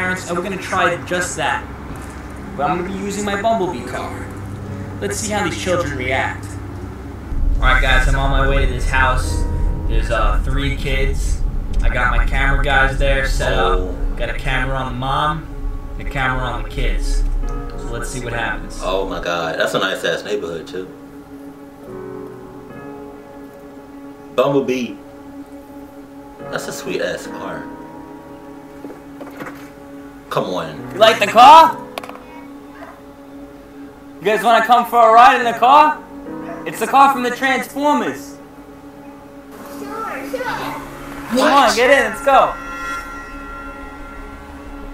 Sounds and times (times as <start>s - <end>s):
Speech: 0.0s - 1.6s, 2.6s - 4.3s, 5.0s - 6.5s, 7.6s - 15.4s, 16.0s - 17.2s, 17.8s - 20.9s, 24.4s - 25.0s, 26.5s - 27.7s, 30.3s - 31.8s, 34.2s - 38.4s, 39.8s - 42.6s
Music: 0.0s - 44.9s.